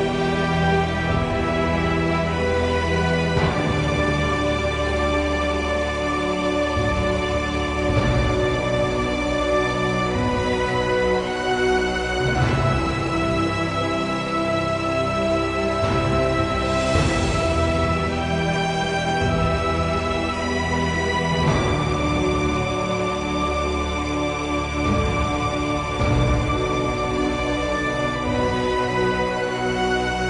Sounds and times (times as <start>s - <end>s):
Music: 0.0s - 30.3s.